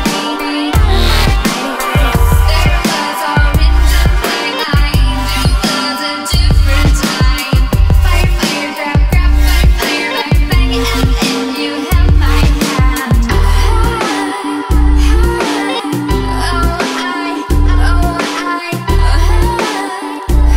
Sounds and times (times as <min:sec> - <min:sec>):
Music: 0:00.0 - 0:20.5.